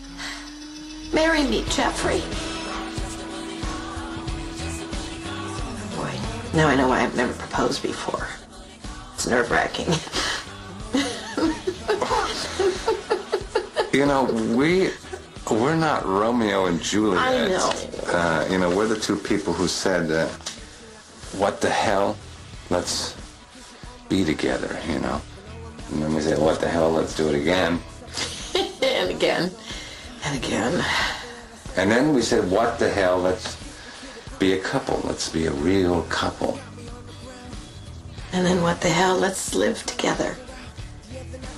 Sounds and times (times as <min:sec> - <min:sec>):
Inside, small room: 0:00.0 - 0:41.5
Music: 0:00.0 - 0:41.5
Speech: 0:14.0 - 0:20.4.